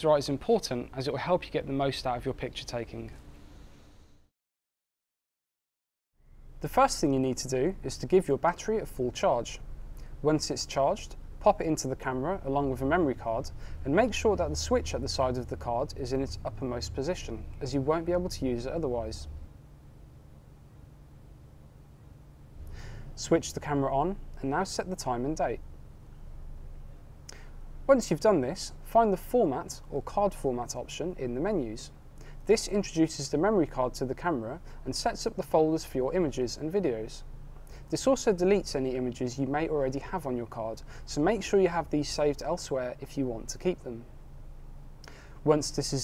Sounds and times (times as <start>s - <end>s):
Speech: 0.0s - 3.2s, 6.6s - 9.6s, 10.2s - 19.3s, 23.2s - 25.6s, 27.9s - 37.2s, 37.9s - 44.1s, 45.4s - 46.0s.